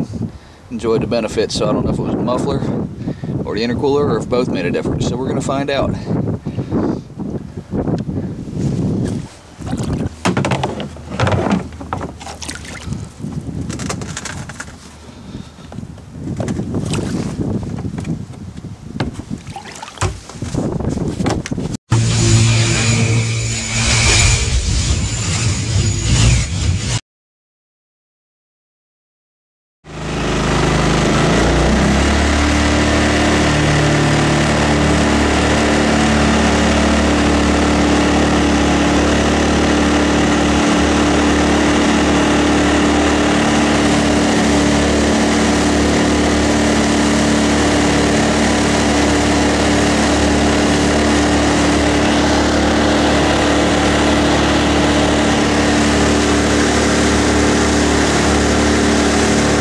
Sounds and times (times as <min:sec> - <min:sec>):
Outside, rural or natural: 0:00.0 - 0:27.0, 0:29.8 - 0:59.6
Boat, Water vehicle: 0:07.4 - 0:21.6, 0:30.0 - 0:59.6.